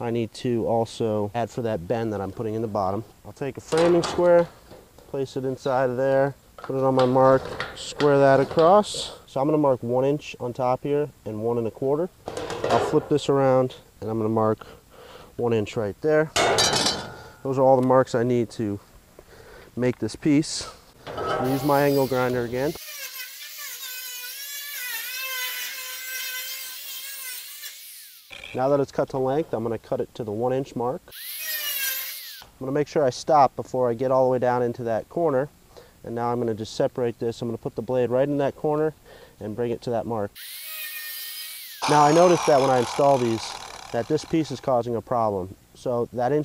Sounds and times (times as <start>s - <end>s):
Speech: 0.0s - 4.5s, 5.1s - 12.1s, 12.7s - 14.6s, 15.4s - 16.4s, 17.4s - 18.8s, 19.8s - 20.8s, 21.4s - 22.8s, 28.6s - 31.0s, 32.6s - 35.5s, 36.1s - 40.4s, 41.8s - 46.4s.